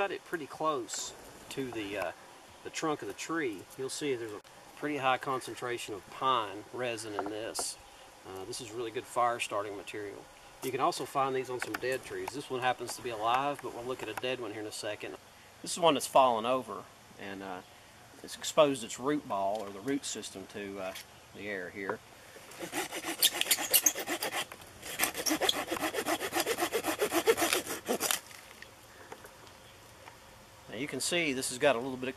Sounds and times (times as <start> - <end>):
Speech: 0.0 - 17.6, 18.2 - 22.0, 30.7 - 32.1.